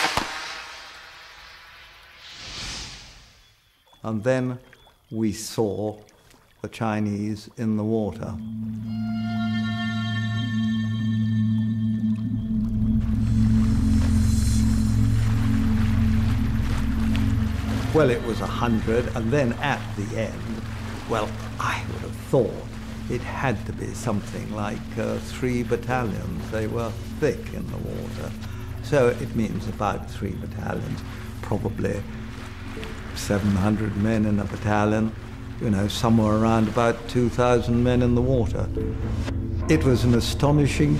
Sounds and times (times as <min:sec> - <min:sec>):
Outside, rural or natural: 0:00.0 - 0:40.9
Speech: 0:04.0 - 0:06.0, 0:06.6 - 0:08.4, 0:17.9 - 0:32.1, 0:33.2 - 0:38.7, 0:39.6 - 0:40.9
Music: 0:08.3 - 0:40.9.